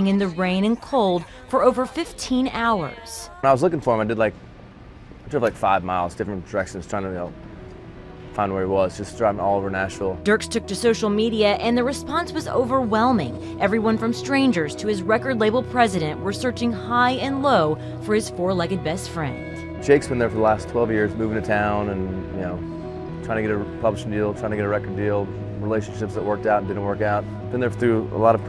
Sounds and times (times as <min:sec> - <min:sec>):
Music: 0:00.0 - 0:03.7, 0:05.9 - 0:28.4.